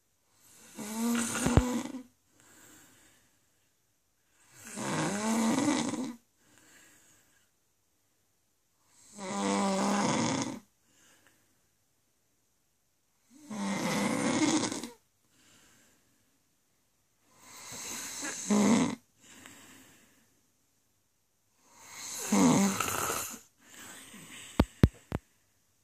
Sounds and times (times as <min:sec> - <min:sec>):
Snoring: 0:00.3 - 0:02.1, 0:04.4 - 0:06.2, 0:08.9 - 0:10.7, 0:13.2 - 0:15.0, 0:17.3 - 0:19.1, 0:21.6 - 0:24.9.